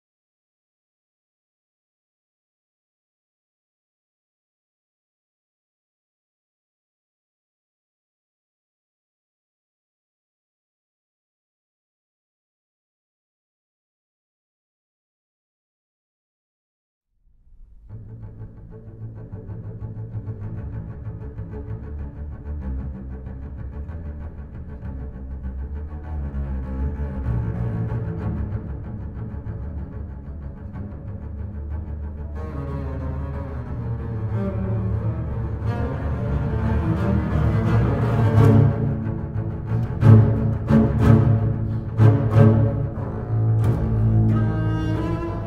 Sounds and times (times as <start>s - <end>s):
Cello: 17.5s - 45.4s
Double bass: 17.6s - 45.4s.